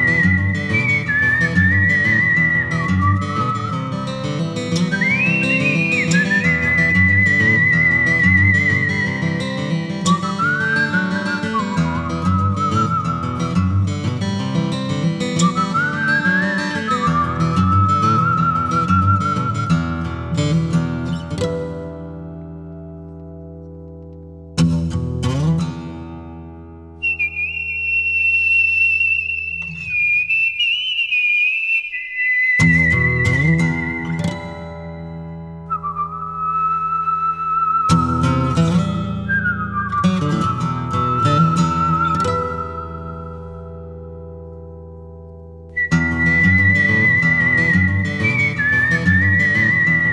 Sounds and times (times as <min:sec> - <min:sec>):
Music: 0:00.0 - 0:27.6, 0:32.6 - 0:50.1.